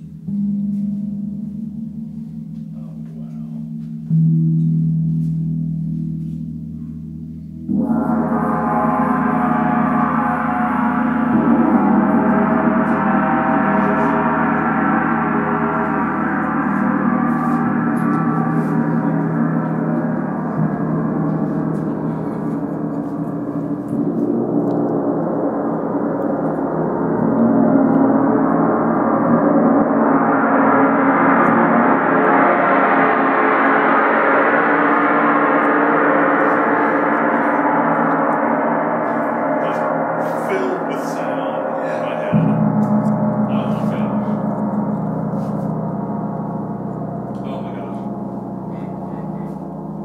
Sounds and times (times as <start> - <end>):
Gong: 0.0 - 50.0.